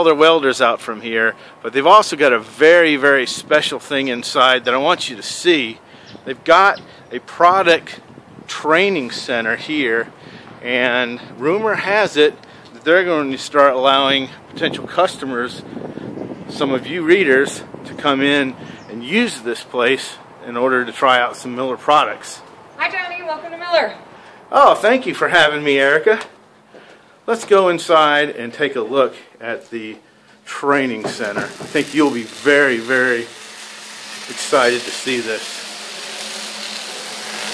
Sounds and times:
Speech: 0.0 - 15.6, 16.5 - 26.3, 27.3 - 33.3, 34.3 - 35.5.

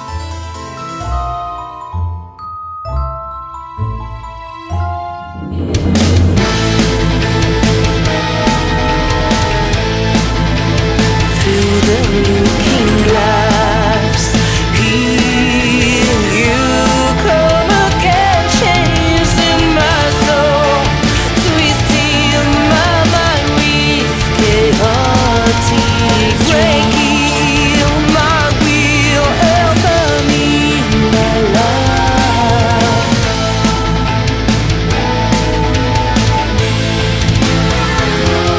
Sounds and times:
Music: 0.0 - 38.5.

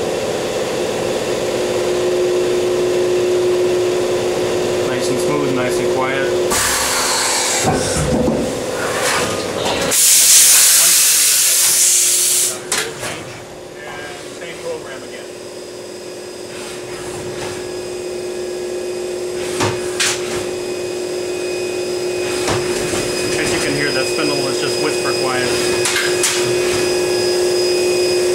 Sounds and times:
Speech: 4.9 - 6.4, 13.8 - 15.3, 23.4 - 25.6.

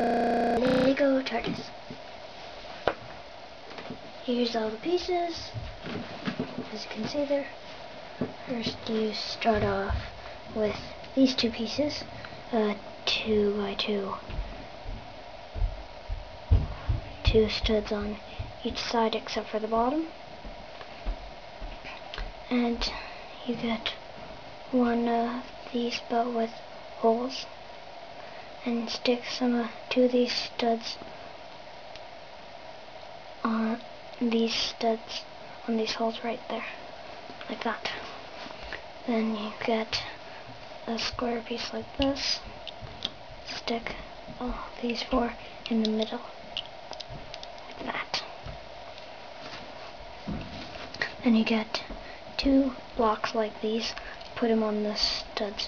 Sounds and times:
Speech: 0.0 - 1.8, 4.2 - 5.7, 6.6 - 7.6, 8.4 - 14.3, 17.2 - 20.2, 22.4 - 24.0, 24.7 - 27.5, 28.6 - 31.0, 33.4 - 36.8, 37.4 - 38.2, 39.0 - 40.2, 40.8 - 42.5, 43.5 - 46.4, 47.7 - 48.4, 51.0 - 55.6.

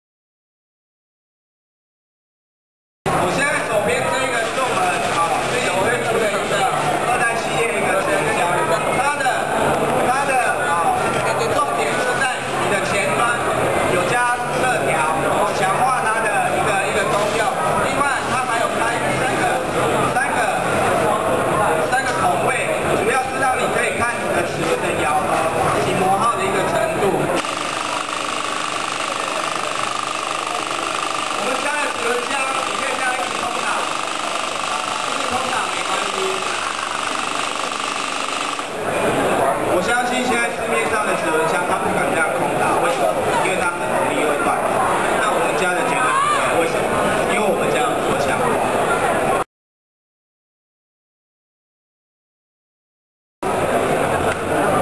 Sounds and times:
Speech: 3.1 - 27.4, 31.4 - 37.0, 38.7 - 49.4.

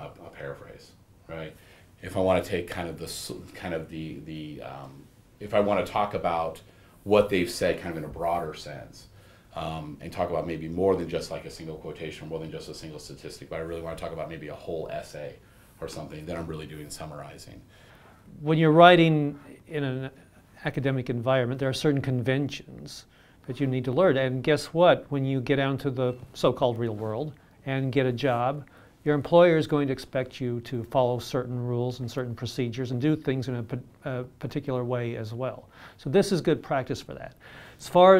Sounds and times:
Speech: 0.0 - 17.7, 18.3 - 38.1.

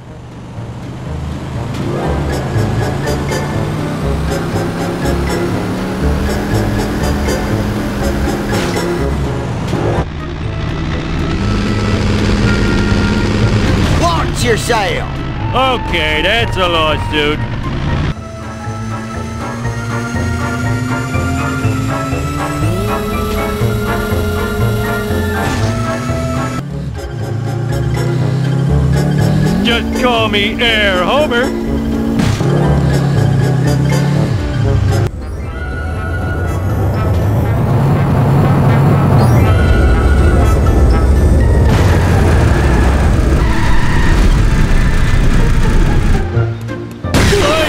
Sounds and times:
Music: 0.0 - 47.6
Speech: 14.0 - 17.4, 29.6 - 31.5.

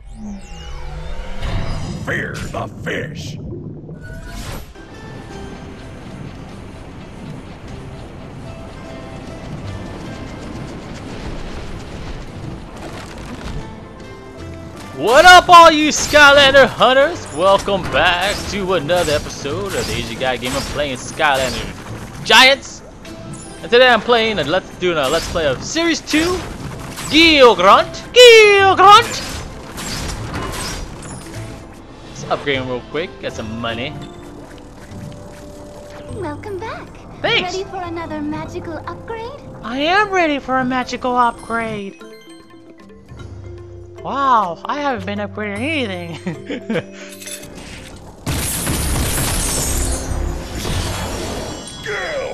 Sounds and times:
Music: 4.0 - 52.3.

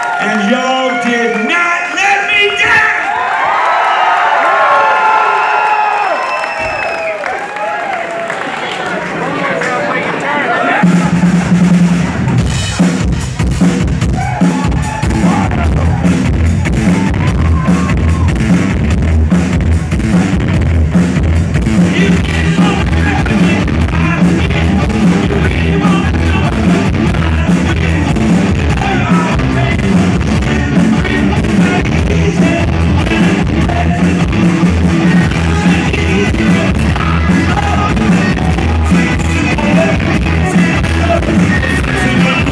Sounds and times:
Music: 10.8 - 42.5.

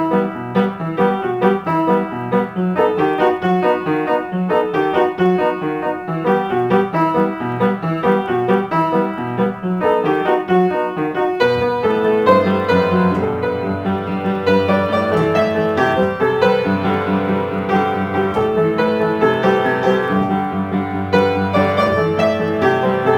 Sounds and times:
Music: 0.0 - 23.1.

